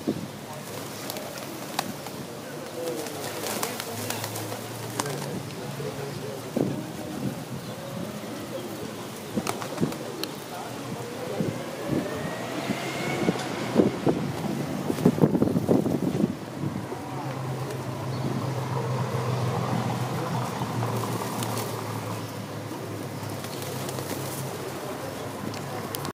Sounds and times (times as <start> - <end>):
Outside, rural or natural: 0.0 - 26.1
Outside, urban or manmade: 0.0 - 26.1.